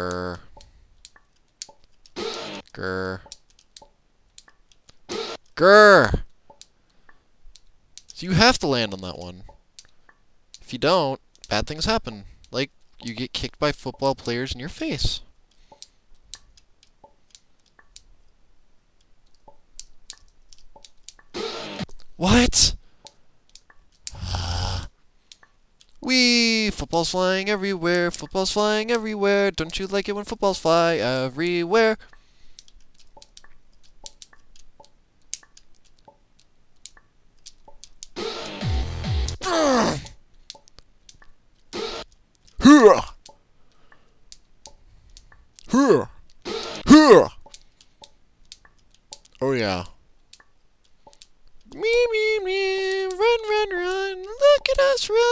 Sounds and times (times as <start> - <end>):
Speech: 0.0 - 0.4, 2.7 - 3.3, 5.6 - 6.3, 8.2 - 9.5, 10.7 - 15.3, 22.2 - 22.8, 26.0 - 32.0, 42.6 - 43.2, 45.7 - 46.1, 46.9 - 47.4, 49.4 - 50.0, 51.7 - 55.3.